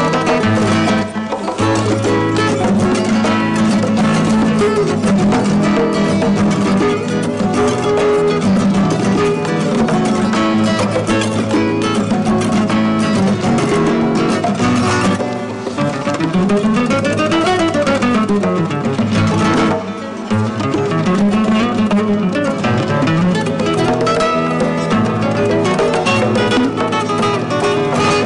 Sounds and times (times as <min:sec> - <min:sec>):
Music: 0:00.0 - 0:28.2.